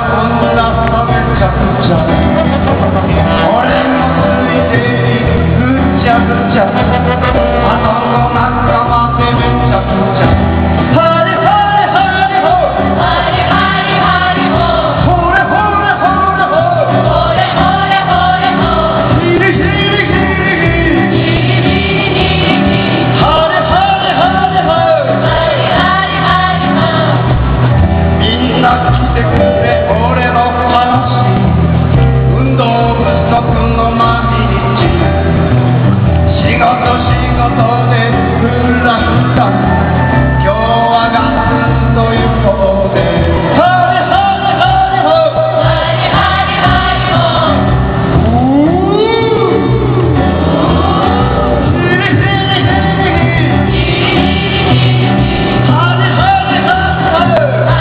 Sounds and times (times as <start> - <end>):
Male singing: 0.0 - 27.3, 28.1 - 31.5, 32.1 - 35.4, 36.3 - 57.8
Music: 0.0 - 57.8.